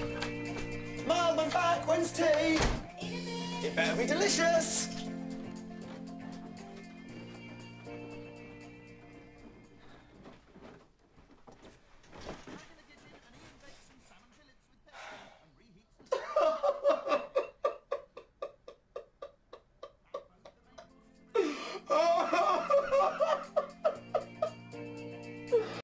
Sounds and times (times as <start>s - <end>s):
Music: 0.0s - 10.4s, 20.6s - 25.8s.